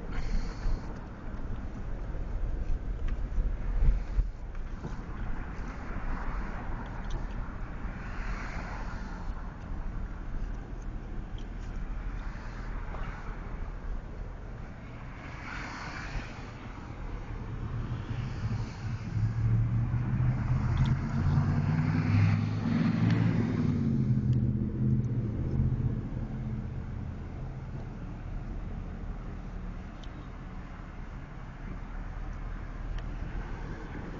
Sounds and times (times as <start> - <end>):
Car: 0.0 - 34.1.